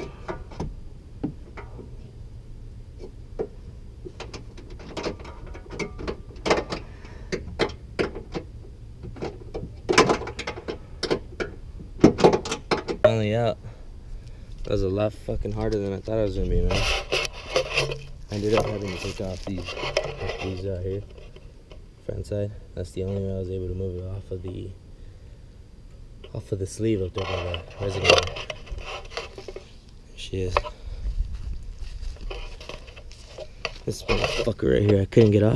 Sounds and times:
Outside, rural or natural: 0.0 - 35.5
Speech: 13.1 - 13.6, 14.7 - 16.8, 18.3 - 21.1, 22.0 - 24.8, 26.3 - 28.3, 30.1 - 30.7, 33.8 - 35.5.

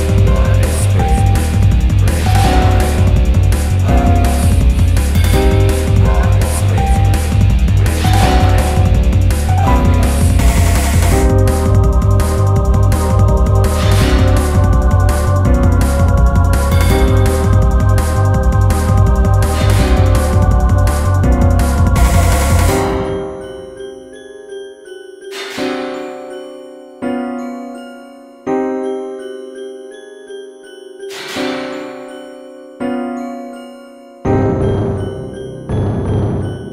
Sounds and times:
Music: 0.0 - 36.7.

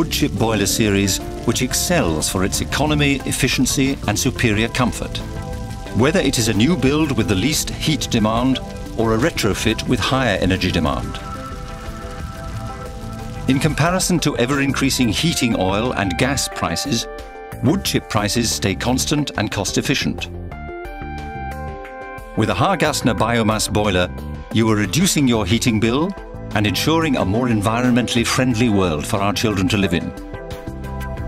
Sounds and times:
Speech: 0.0 - 5.2, 6.0 - 11.2, 13.5 - 20.3, 22.4 - 30.1
Music: 0.0 - 31.2.

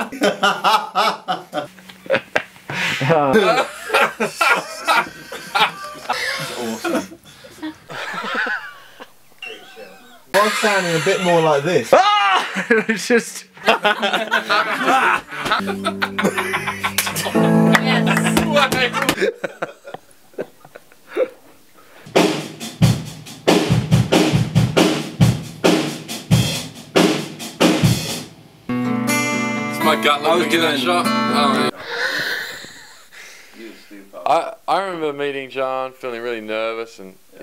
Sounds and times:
Speech: 9.7 - 12.0, 12.7 - 13.5, 17.1 - 19.1, 29.8 - 31.7, 33.6 - 37.4
Music: 15.5 - 19.2, 22.1 - 31.8.

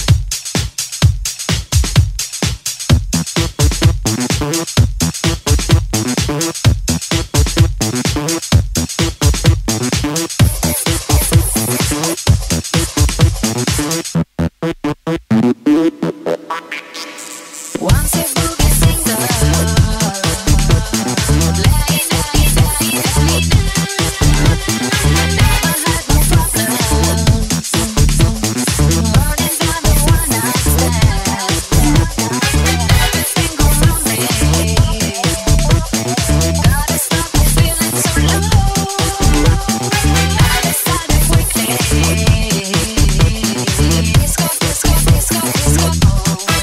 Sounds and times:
Funk: 0.0 - 46.6
Pop music: 9.0 - 14.0, 15.8 - 46.6.

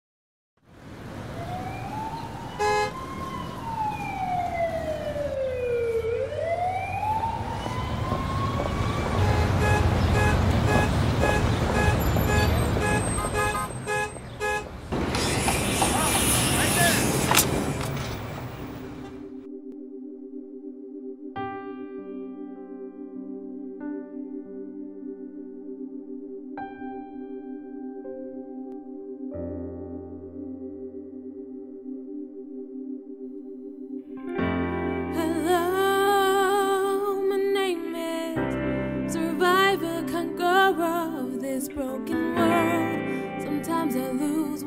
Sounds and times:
Vehicle horn, car horn, honking: 2.6 - 2.9, 9.2 - 14.7.

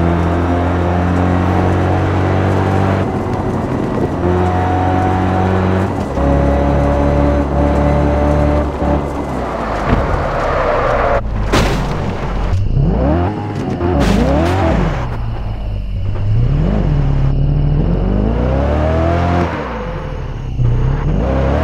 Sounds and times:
Car: 0.0 - 21.6
Outside, rural or natural: 0.0 - 21.6.

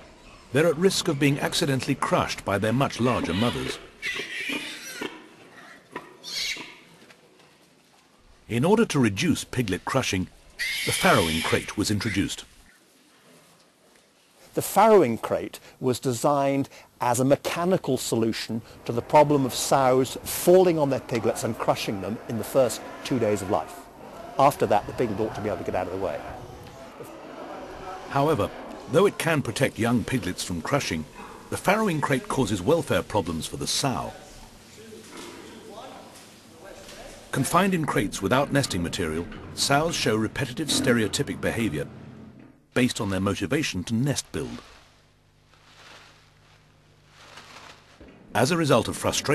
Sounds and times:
Speech: 0.5 - 3.9, 8.5 - 10.3, 10.9 - 12.5, 14.5 - 26.4, 27.7 - 41.9, 42.8 - 44.6, 48.4 - 49.3
Oink: 3.1 - 6.9, 10.6 - 11.5.

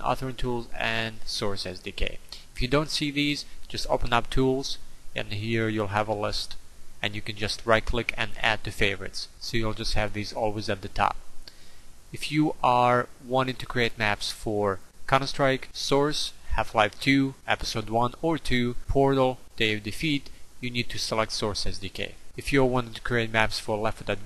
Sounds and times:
Speech: 0.0 - 11.2, 12.2 - 24.2.

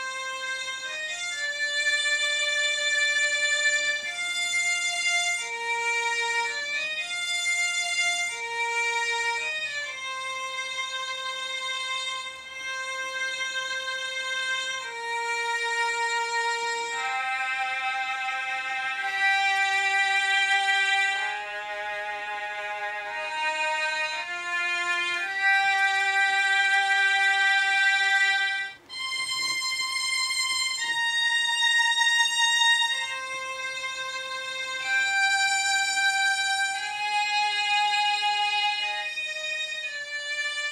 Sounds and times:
Musical instrument: 13.4 - 40.7.

